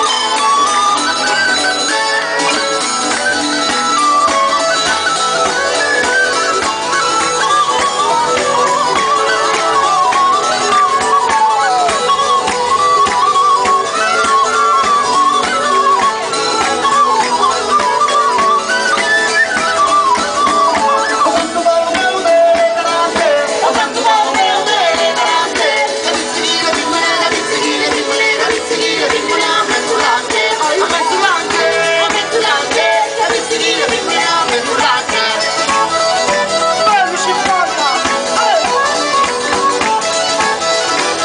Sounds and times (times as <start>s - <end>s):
Music: 0.0s - 41.2s.